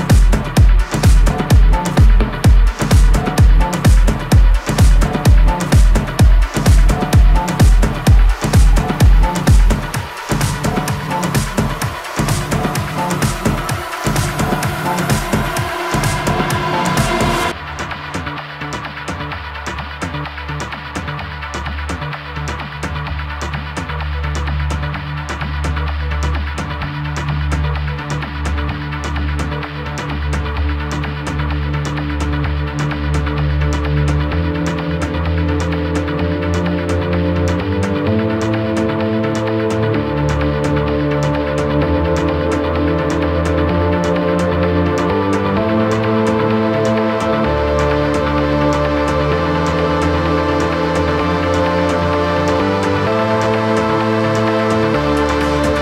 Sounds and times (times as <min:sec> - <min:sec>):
Music: 0:00.0 - 0:55.8.